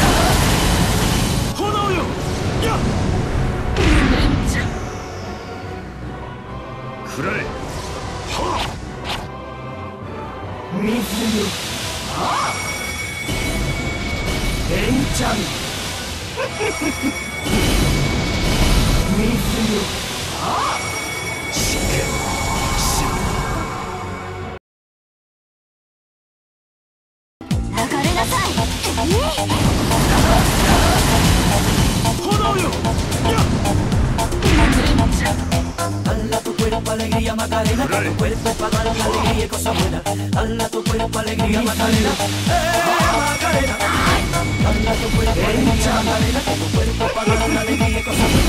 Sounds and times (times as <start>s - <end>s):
Music: 0.0s - 24.6s, 27.4s - 48.4s
Speech: 10.7s - 11.6s, 27.8s - 29.6s.